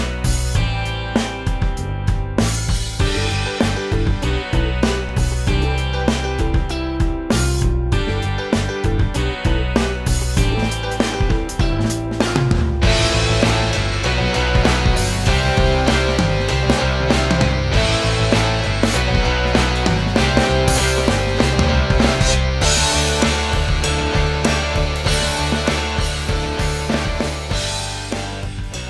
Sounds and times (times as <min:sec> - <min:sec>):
Music: 0:00.0 - 0:28.8.